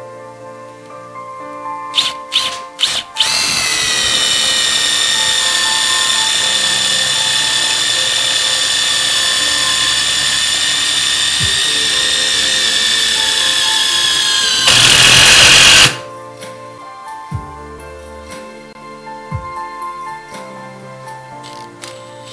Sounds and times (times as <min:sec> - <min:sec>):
Music: 0:00.0 - 0:22.3
Drill: 0:02.0 - 0:16.0.